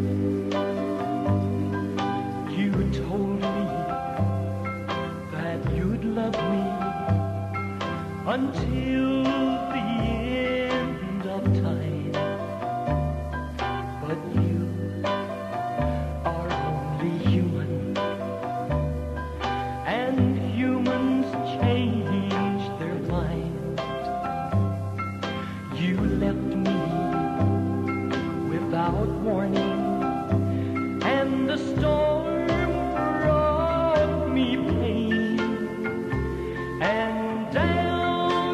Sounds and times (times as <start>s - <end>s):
Music: 0.0s - 38.5s.